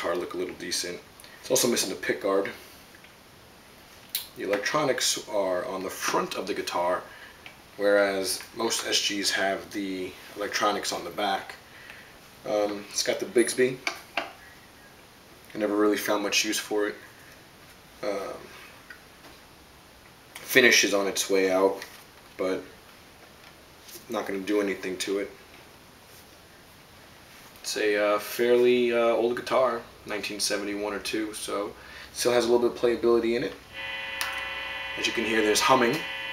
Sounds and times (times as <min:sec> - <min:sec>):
Speech: 0:00.0 - 0:02.6, 0:04.2 - 0:07.1, 0:07.8 - 0:11.6, 0:12.4 - 0:13.9, 0:15.5 - 0:17.1, 0:18.0 - 0:18.6, 0:20.4 - 0:22.8, 0:24.0 - 0:25.4, 0:27.6 - 0:33.6, 0:35.0 - 0:36.1.